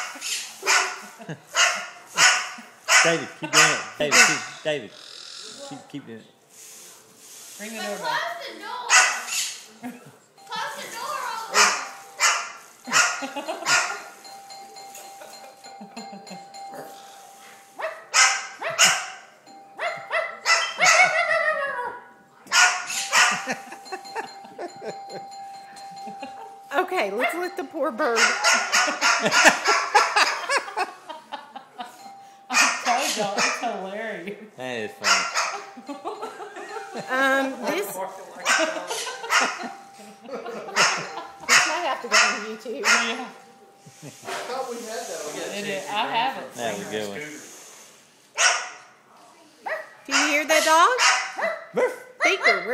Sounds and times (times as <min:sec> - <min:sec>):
Ding-dong: 0:14.2 - 0:17.6, 0:32.0 - 0:32.6.